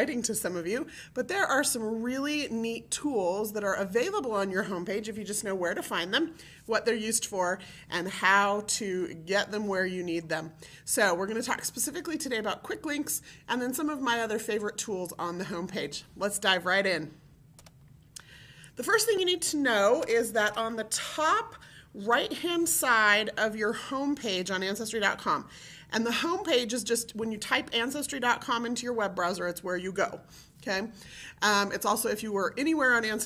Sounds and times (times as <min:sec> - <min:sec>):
Speech: 0:00.0 - 0:17.2, 0:18.8 - 0:33.2.